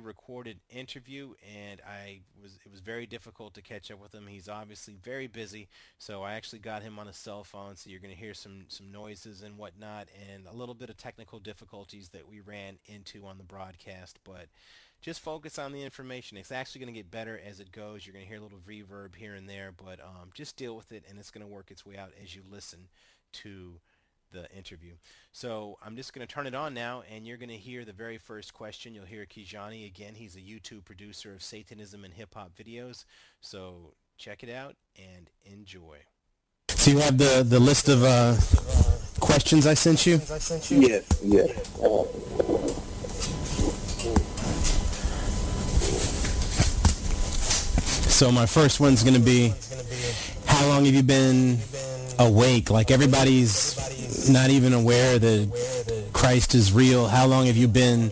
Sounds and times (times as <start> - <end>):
Speech: 0.0 - 36.1, 36.7 - 42.7, 43.6 - 44.5, 48.1 - 58.1.